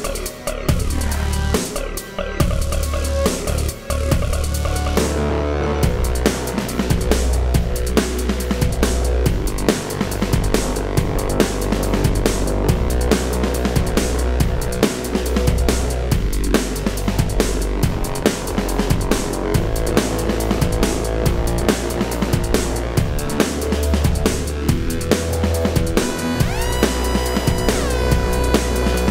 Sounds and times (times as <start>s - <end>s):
Music: 0.0s - 29.1s.